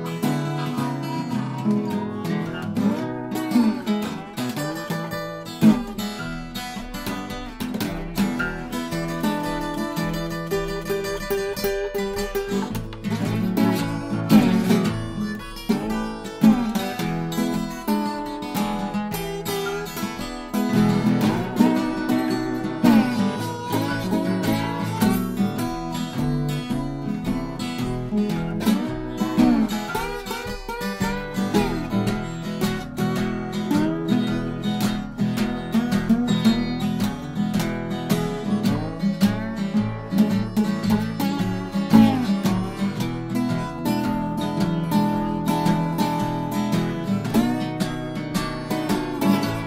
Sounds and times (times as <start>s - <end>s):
Acoustic guitar: 0.0s - 49.6s
Strum: 0.0s - 49.6s.